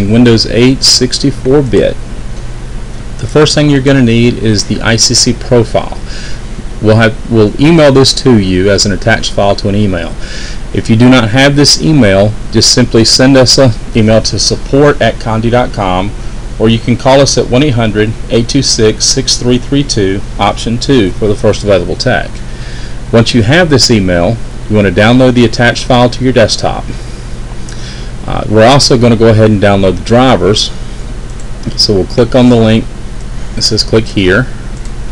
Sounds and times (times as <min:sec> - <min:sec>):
Speech: 0:00.0 - 0:02.0, 0:03.2 - 0:06.1, 0:06.8 - 0:22.4, 0:23.1 - 0:27.0, 0:28.2 - 0:30.8, 0:31.6 - 0:32.9, 0:33.6 - 0:34.5.